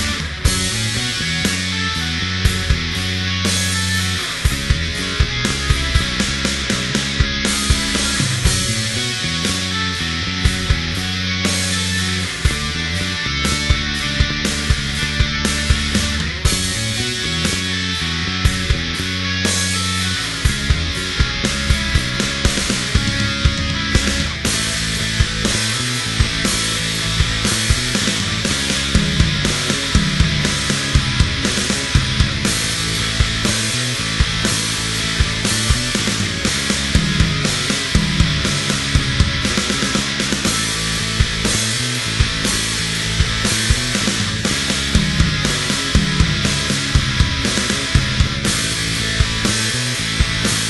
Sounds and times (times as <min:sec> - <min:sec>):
Heavy metal: 0:00.0 - 0:50.7.